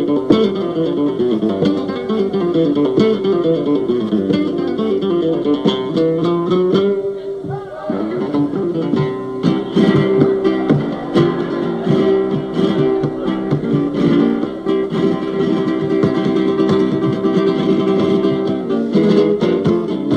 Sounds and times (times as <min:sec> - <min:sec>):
Flamenco: 0:00.0 - 0:20.1
Guitar: 0:00.0 - 0:20.1
Speech: 0:07.0 - 0:08.6.